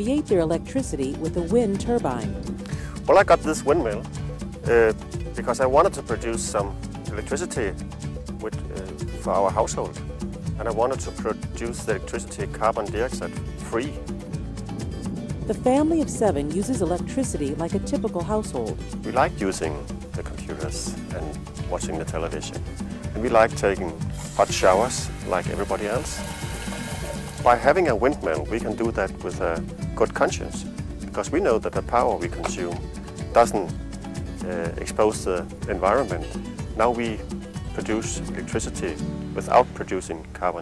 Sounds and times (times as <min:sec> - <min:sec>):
Speech: 0:00.0 - 0:02.3, 0:03.1 - 0:04.0, 0:04.7 - 0:07.8, 0:08.4 - 0:09.9, 0:10.6 - 0:14.0, 0:15.5 - 0:22.6, 0:23.2 - 0:26.2, 0:27.5 - 0:30.6, 0:31.2 - 0:32.8, 0:33.4 - 0:33.7, 0:34.4 - 0:37.2, 0:37.8 - 0:40.6
Music: 0:00.0 - 0:40.6.